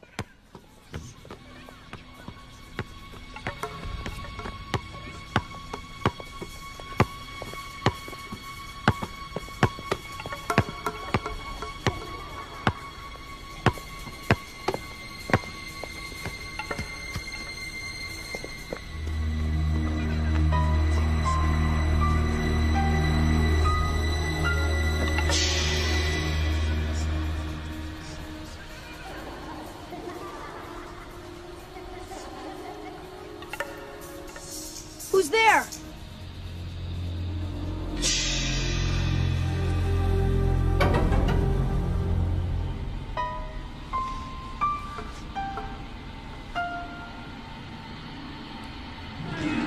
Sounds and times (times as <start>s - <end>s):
Music: 0.0s - 49.6s
Speech: 35.1s - 35.8s.